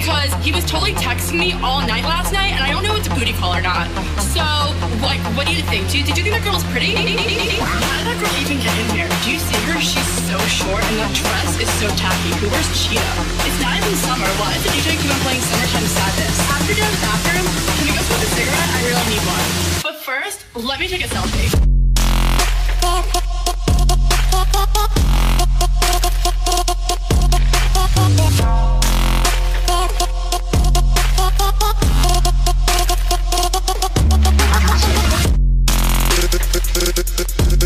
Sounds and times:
Speech: 0:00.0 - 0:21.6
Music: 0:00.0 - 0:37.6.

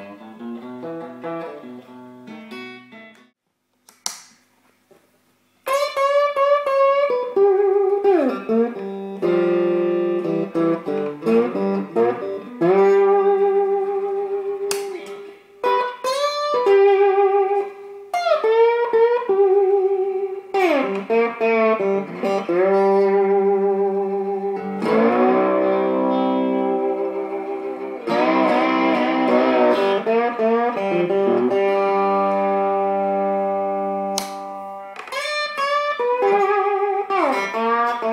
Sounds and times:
Electric guitar: 0:00.0 - 0:03.3, 0:05.6 - 0:38.1.

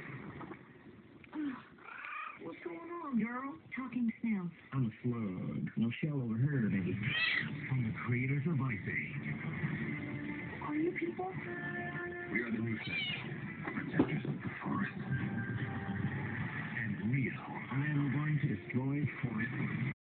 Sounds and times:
Meow: 0:01.8 - 0:02.4, 0:07.1 - 0:07.5, 0:12.8 - 0:13.3
Speech: 0:02.4 - 0:09.2, 0:16.8 - 0:19.7.

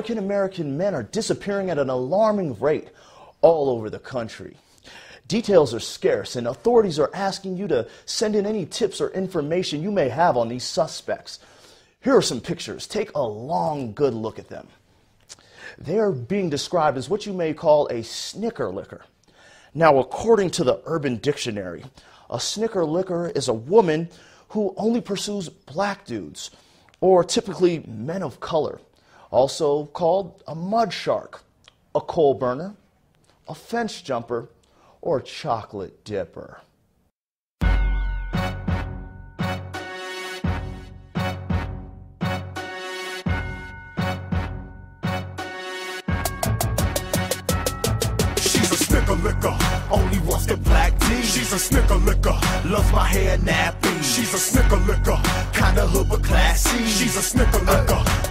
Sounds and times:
Speech: 0:00.0 - 0:04.6, 0:05.3 - 0:11.4, 0:12.0 - 0:14.8, 0:15.8 - 0:19.1, 0:19.8 - 0:32.8, 0:33.5 - 0:36.7.

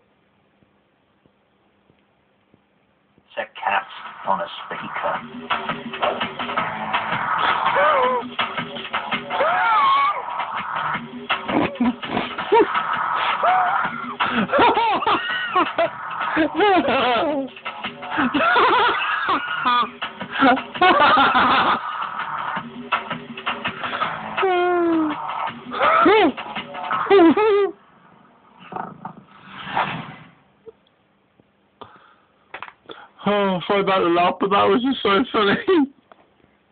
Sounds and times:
Speech: 0:03.3 - 0:05.2, 0:33.2 - 0:35.9
Music: 0:03.6 - 0:27.8.

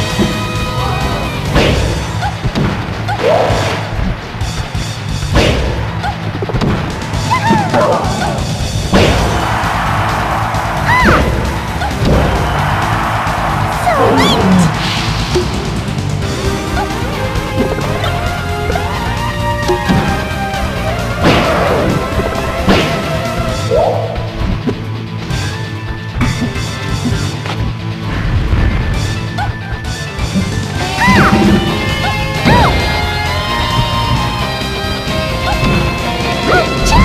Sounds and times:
Music: 0:00.0 - 0:37.0.

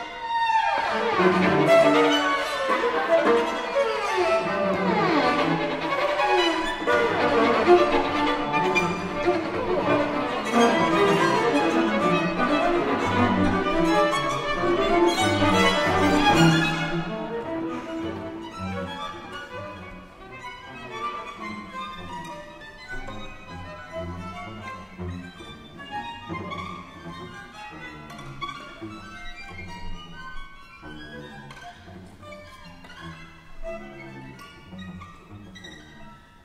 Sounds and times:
Violin, fiddle: 0:00.0 - 0:36.4.

